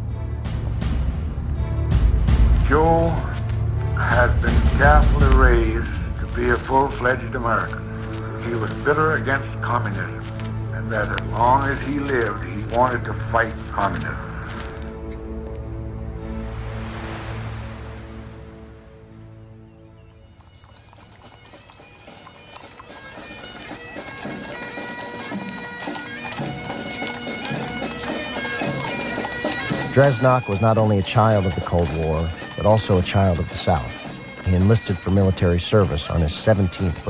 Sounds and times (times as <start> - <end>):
Bagpipes: 2.4 - 15.4, 20.1 - 37.1
Speech: 2.6 - 3.4, 4.0 - 7.8, 8.4 - 10.2, 10.8 - 14.3, 29.9 - 37.1.